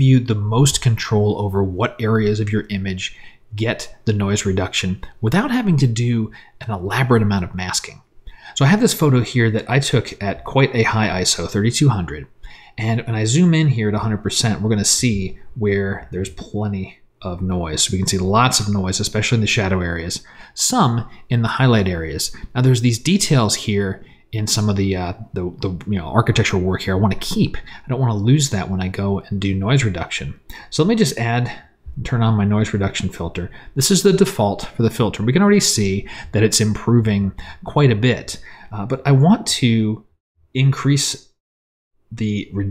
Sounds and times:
Speech: 0.0 - 41.4, 42.1 - 42.7.

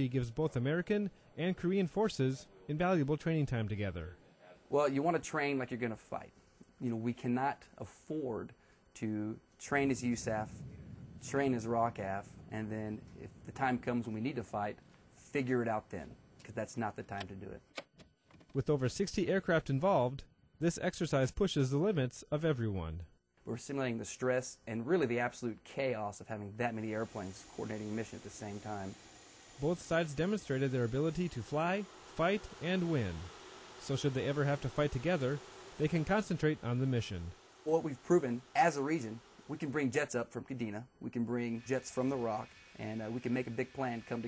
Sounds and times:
Speech: 0.0 - 10.6, 11.2 - 17.6, 18.6 - 29.0, 29.6 - 44.2.

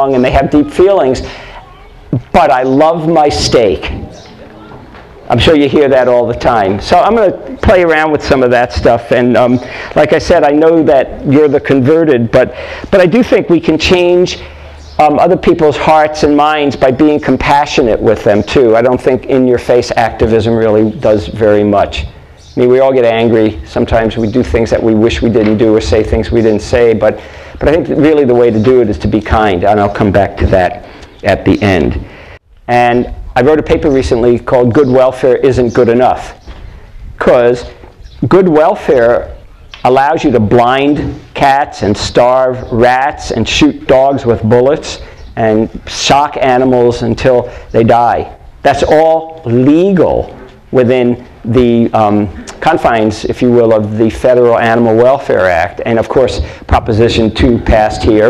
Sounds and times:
Speech: 0.0 - 32.1, 32.7 - 36.4, 37.2 - 58.2.

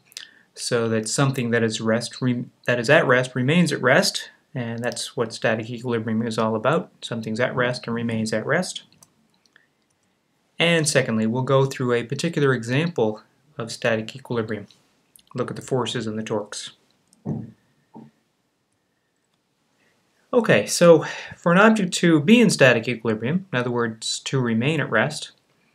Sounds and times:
Speech: 0.2 - 8.9, 10.6 - 17.6, 20.3 - 25.4.

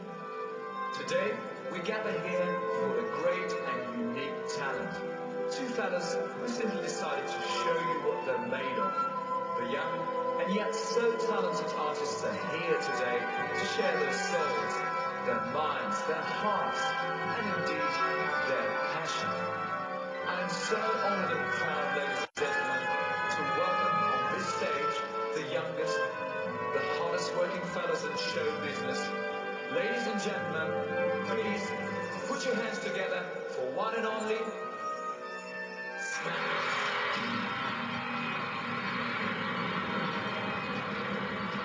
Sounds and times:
Music: 0.0 - 41.6
Speech: 1.0 - 9.0, 9.6 - 19.5, 20.3 - 34.7, 36.0 - 36.8.

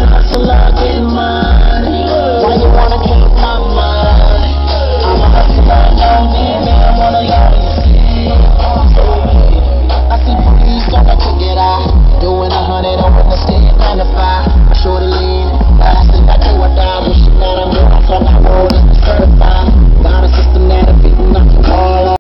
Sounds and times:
Music: 0.0 - 22.2.

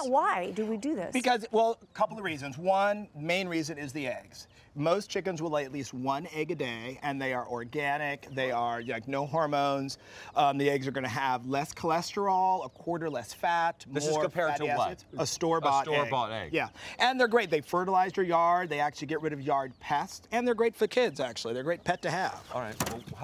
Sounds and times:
Speech: 0.0 - 23.2.

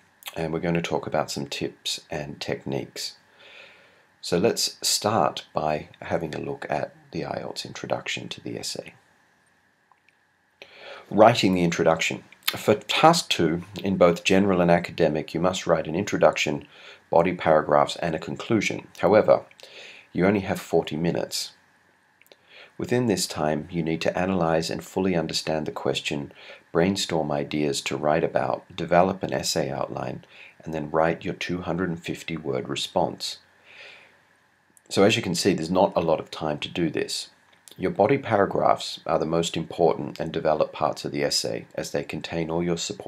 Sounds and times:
Speech: 0.2 - 3.2, 4.2 - 9.0, 11.0 - 19.5, 20.1 - 21.6, 22.8 - 33.4, 34.9 - 43.0.

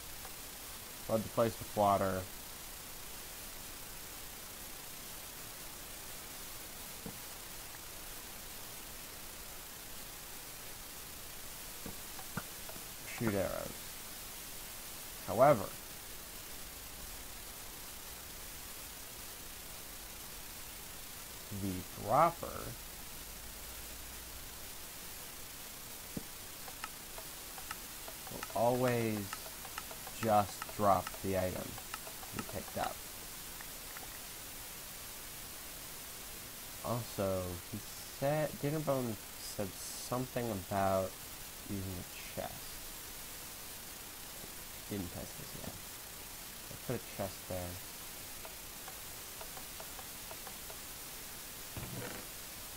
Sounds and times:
Silence: 0.0 - 39.7.

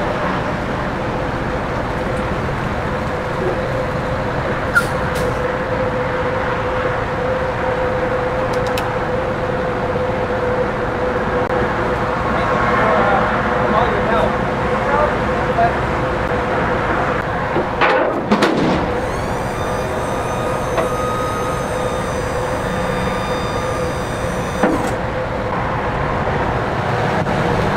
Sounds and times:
Outside, urban or manmade: 0.0 - 27.7.

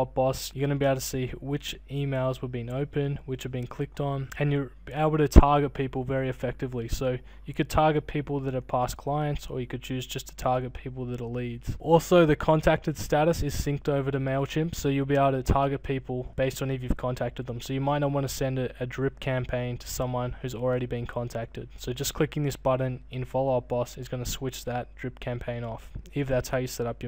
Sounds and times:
Speech: 0.0 - 27.0.

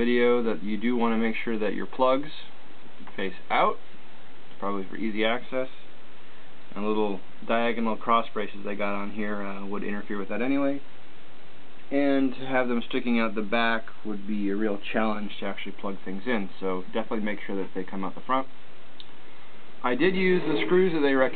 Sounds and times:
Speech: 0.0 - 3.8, 4.6 - 5.9, 6.7 - 10.9, 11.9 - 18.5, 19.8 - 21.3.

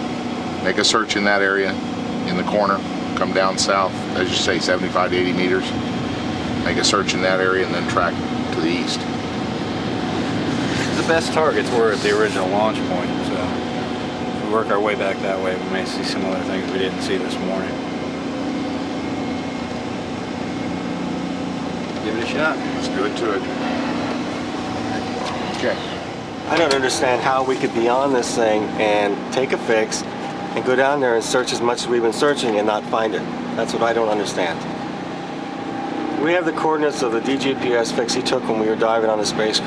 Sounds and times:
Air conditioning: 0.0 - 39.6
Speech: 0.6 - 5.8, 6.6 - 9.1, 10.9 - 13.6, 14.4 - 17.8, 22.0 - 23.5, 25.5 - 34.6, 36.2 - 39.6.

